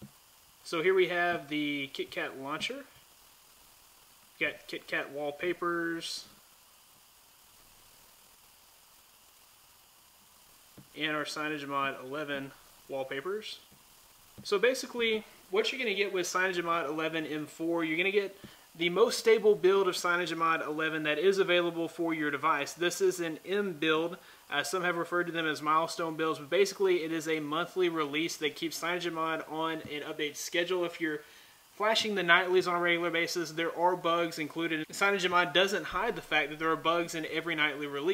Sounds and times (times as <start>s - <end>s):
Inside, small room: 0.0s - 38.1s
Speech: 0.7s - 3.0s, 4.4s - 6.4s, 11.0s - 13.6s, 14.4s - 31.2s, 31.8s - 38.1s.